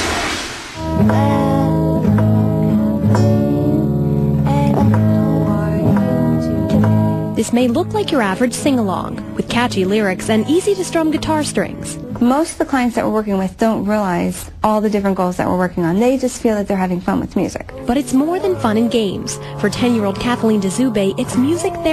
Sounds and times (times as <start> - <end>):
Music: 0.8 - 21.9
Speech: 7.4 - 21.9.